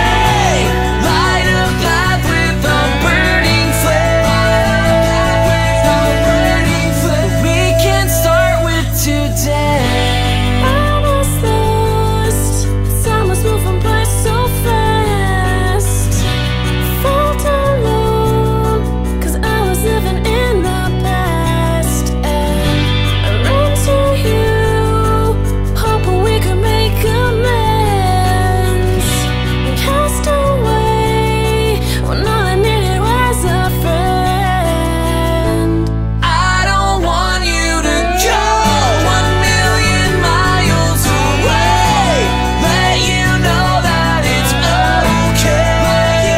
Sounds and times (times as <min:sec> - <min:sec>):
Music: 0:00.0 - 0:46.3.